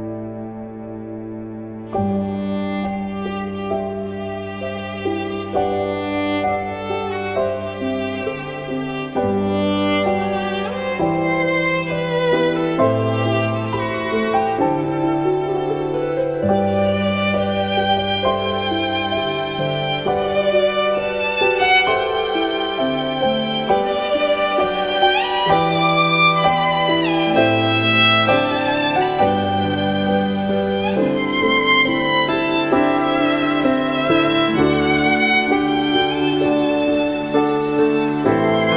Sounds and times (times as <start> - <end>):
Violin, fiddle: 0.0 - 38.7.